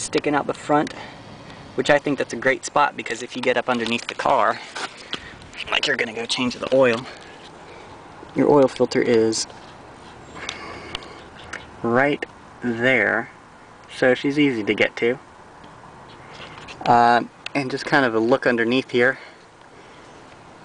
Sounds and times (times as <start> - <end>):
Vehicle: 0.0 - 20.6.